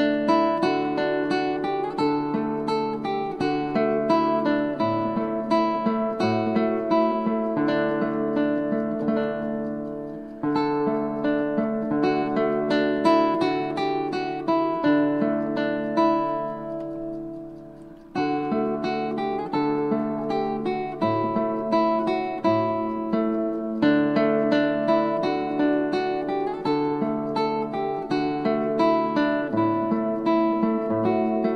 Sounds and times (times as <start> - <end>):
Acoustic guitar: 0.0 - 31.5.